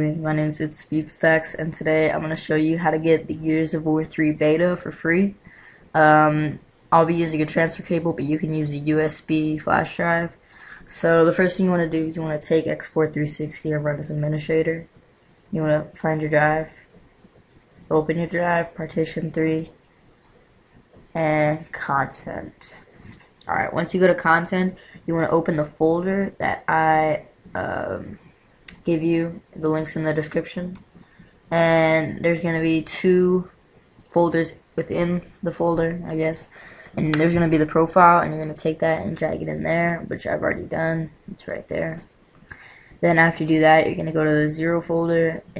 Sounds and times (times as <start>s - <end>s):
Speech: 0.0s - 14.9s, 15.5s - 16.9s, 17.9s - 19.8s, 21.2s - 30.9s, 31.5s - 33.5s, 34.1s - 45.5s.